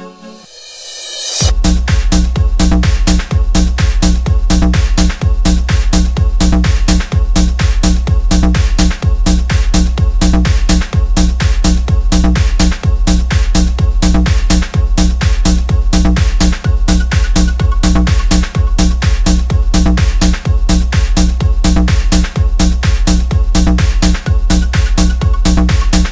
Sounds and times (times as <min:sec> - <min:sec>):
Music: 0:00.0 - 0:26.1.